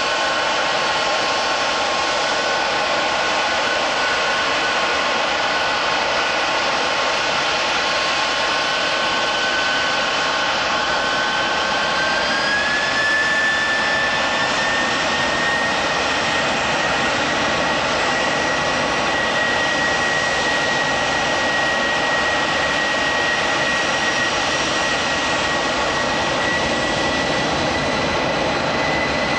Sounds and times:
Aircraft engine: 0.0 - 29.3.

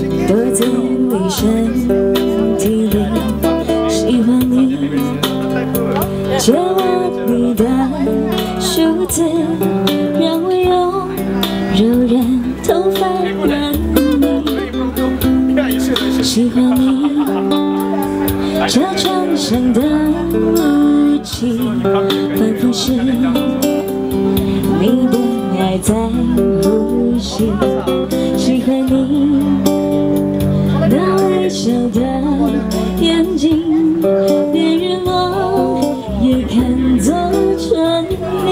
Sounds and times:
Speech: 0.0 - 23.9, 24.6 - 29.6, 30.6 - 38.5
Music: 0.0 - 38.5
Female singing: 0.2 - 5.0, 6.3 - 14.7, 16.2 - 18.0, 18.6 - 23.4, 24.7 - 29.8, 30.8 - 38.5.

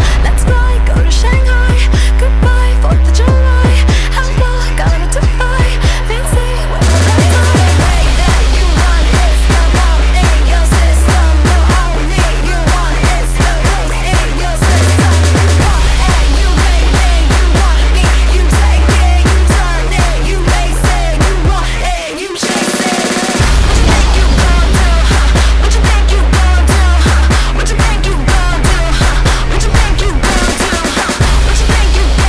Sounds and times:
Music: 0.0 - 32.2.

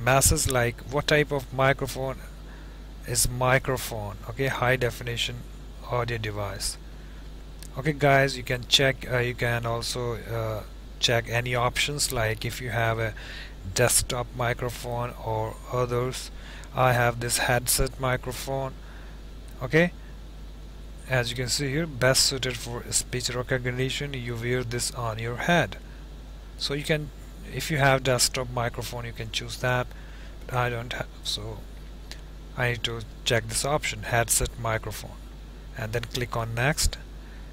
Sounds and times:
Speech: 0.0 - 2.3, 3.0 - 6.8, 7.6 - 18.8, 19.5 - 20.0, 21.0 - 25.8, 26.6 - 29.9, 30.5 - 31.6, 32.6 - 35.2, 35.8 - 37.0.

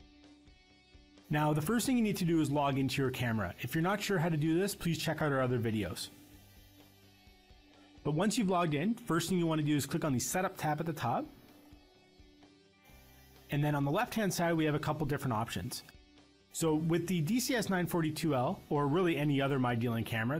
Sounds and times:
Speech: 1.3 - 6.2, 8.1 - 11.3, 13.5 - 15.9, 16.6 - 20.3.

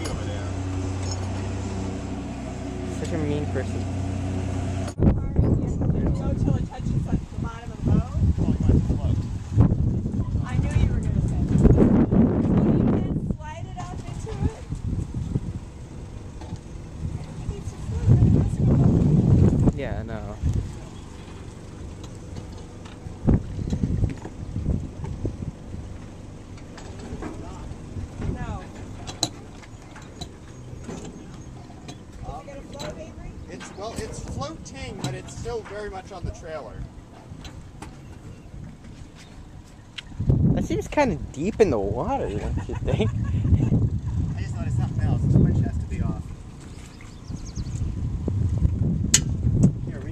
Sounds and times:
Boat, Water vehicle: 0.0 - 50.1.

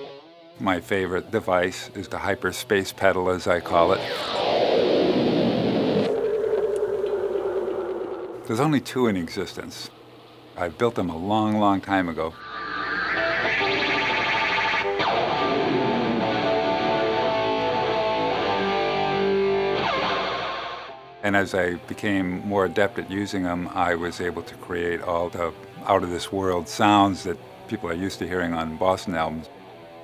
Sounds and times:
Music: 0.0 - 3.0, 12.4 - 27.4
Speech: 0.6 - 4.1, 8.5 - 9.9, 10.6 - 12.4, 21.2 - 29.5.

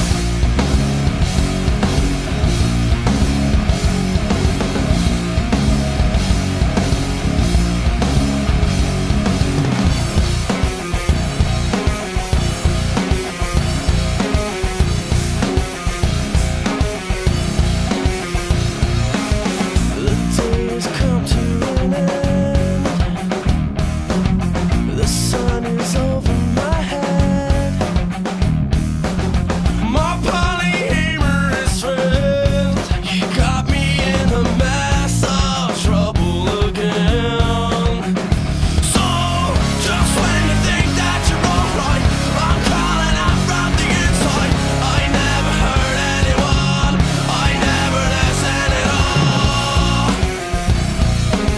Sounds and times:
Music: 0.0 - 51.5.

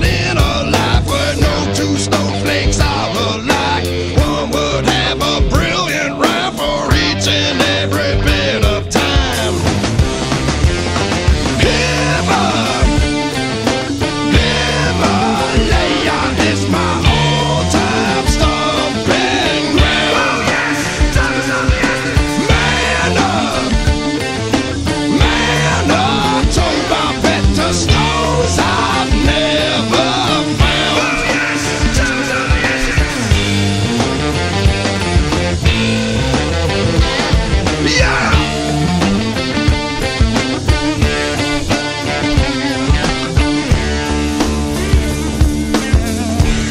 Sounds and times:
Rock music: 0.0 - 46.7.

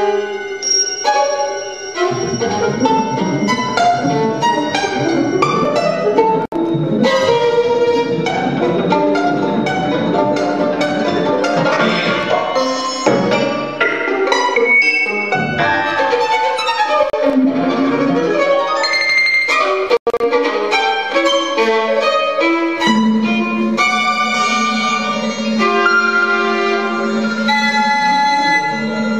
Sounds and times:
Violin, fiddle: 0.0 - 29.1.

